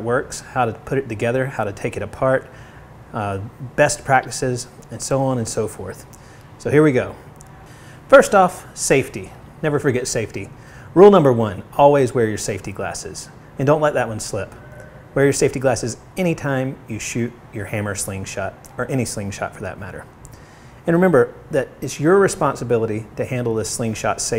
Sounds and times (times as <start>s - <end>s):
Speech: 0.0s - 2.5s, 3.1s - 7.3s, 8.1s - 14.6s, 15.2s - 20.1s, 20.8s - 24.3s.